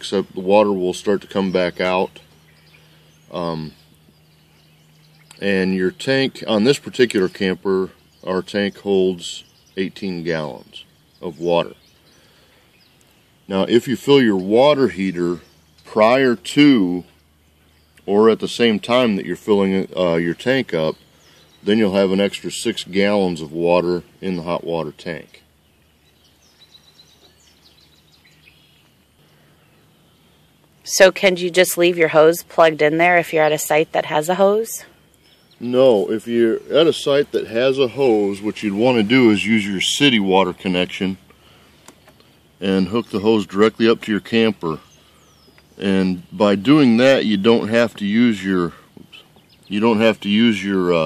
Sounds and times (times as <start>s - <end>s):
Speech: 0.0s - 2.2s, 3.3s - 3.8s, 5.4s - 11.8s, 13.5s - 17.1s, 18.0s - 21.0s, 21.6s - 25.4s, 30.9s - 34.9s, 35.6s - 41.2s, 42.6s - 44.9s, 45.8s - 51.0s.